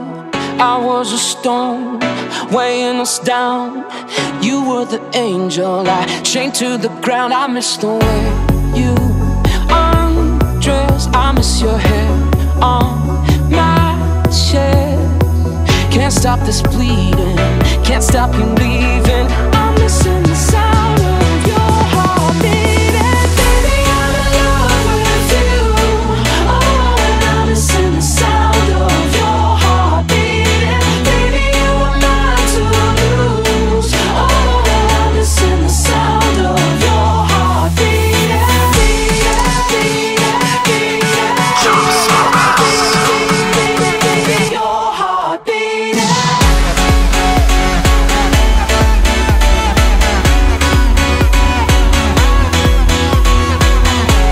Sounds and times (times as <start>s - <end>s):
Music: 0.0s - 54.3s.